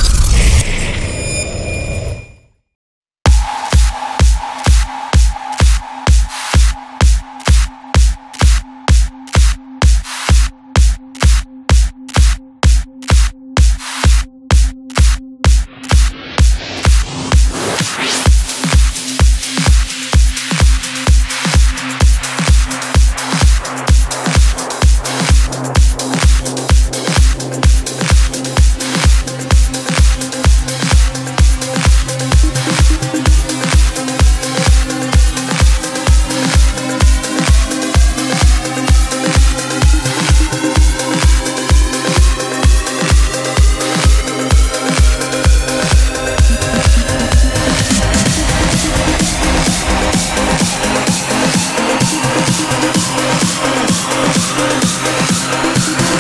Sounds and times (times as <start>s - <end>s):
Music: 3.3s - 56.2s.